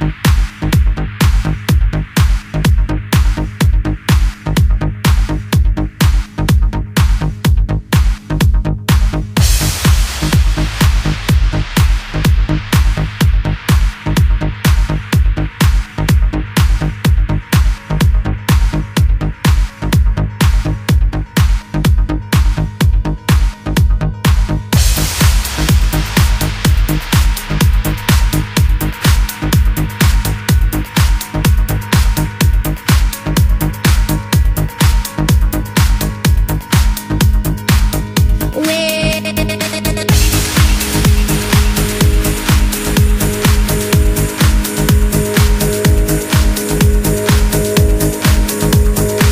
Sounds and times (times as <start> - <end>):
Music: 0.0 - 49.3.